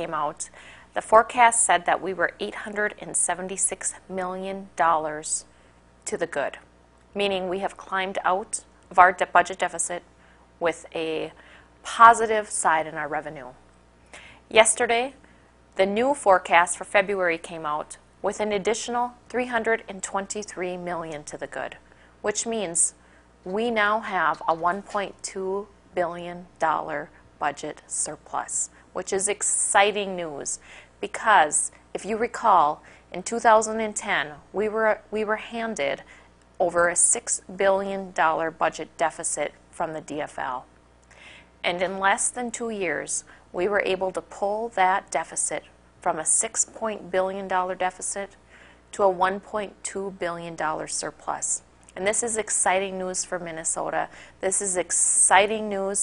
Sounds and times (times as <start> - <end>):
Speech: 0.0 - 5.5, 6.1 - 13.6, 14.5 - 15.2, 15.8 - 40.7, 41.6 - 56.0.